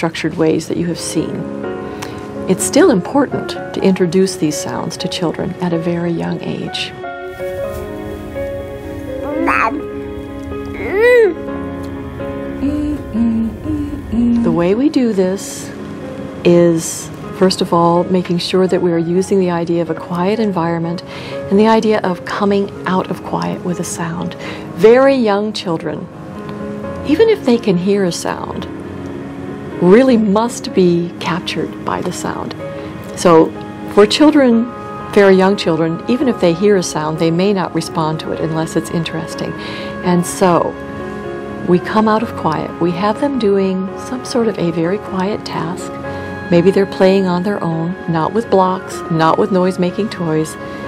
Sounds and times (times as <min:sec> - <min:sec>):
Music: 0:00.0 - 0:50.8
Speech: 0:09.3 - 0:09.8, 0:10.8 - 0:11.4, 0:16.5 - 0:26.1, 0:27.1 - 0:28.7, 0:29.8 - 0:32.5, 0:33.2 - 0:40.7, 0:41.7 - 0:45.9, 0:46.5 - 0:50.6.